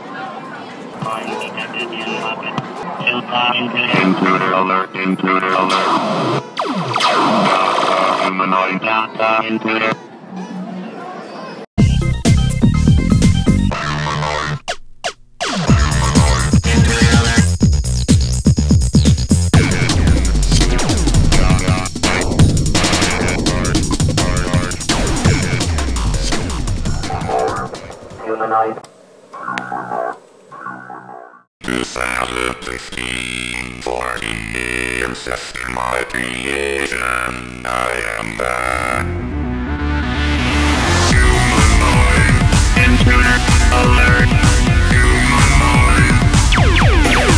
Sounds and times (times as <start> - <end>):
Throbbing: 19.4 - 28.5, 29.4 - 31.5, 33.0 - 47.3.